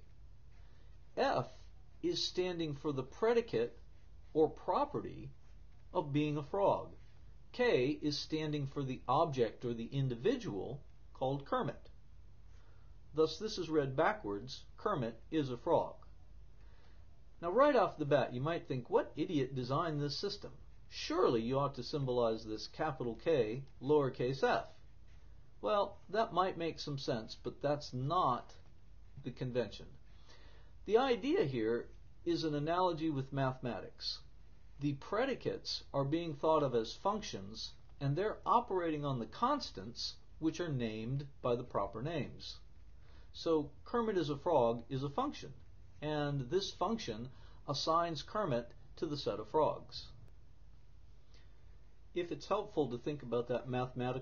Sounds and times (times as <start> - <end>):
Narration, monologue: 0.0 - 54.2.